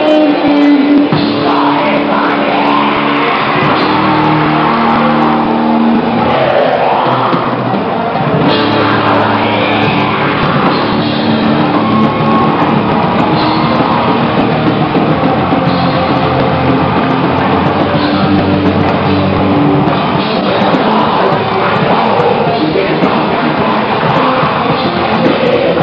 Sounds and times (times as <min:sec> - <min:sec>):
Music: 0:00.0 - 0:25.8.